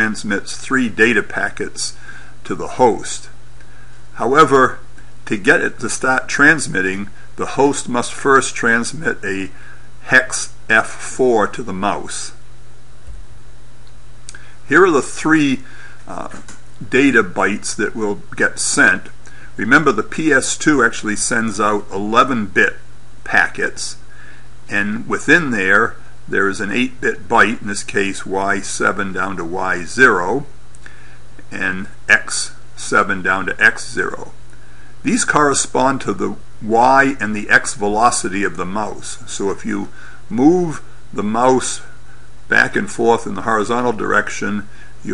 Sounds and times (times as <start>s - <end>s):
Speech: 0.0s - 3.4s, 4.2s - 12.4s, 14.6s - 24.0s, 24.7s - 30.6s, 31.5s - 34.4s, 35.0s - 45.1s.